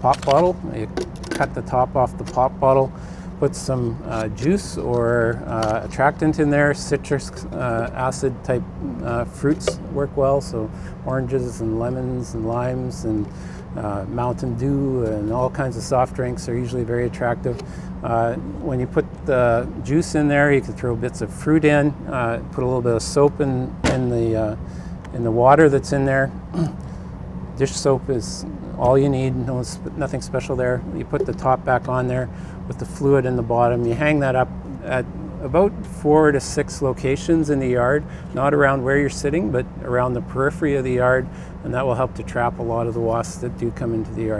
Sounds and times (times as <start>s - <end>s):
Speech: 0.0s - 26.8s, 27.6s - 44.3s.